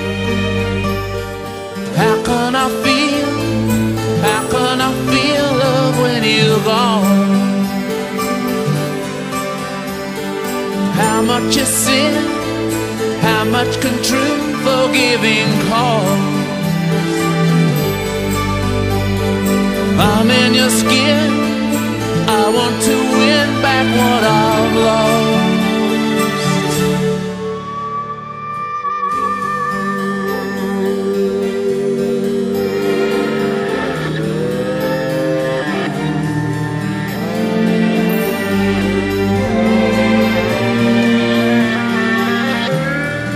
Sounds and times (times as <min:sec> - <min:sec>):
Tender music: 0:00.0 - 0:43.3.